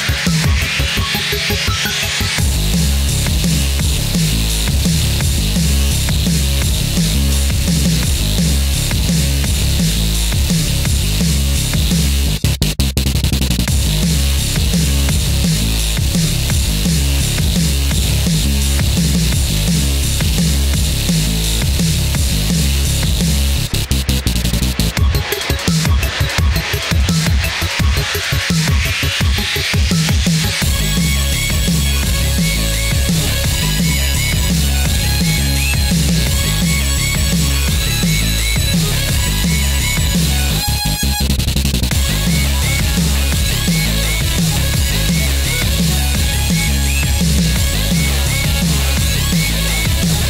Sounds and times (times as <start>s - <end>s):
Dubstep: 0.0s - 50.3s.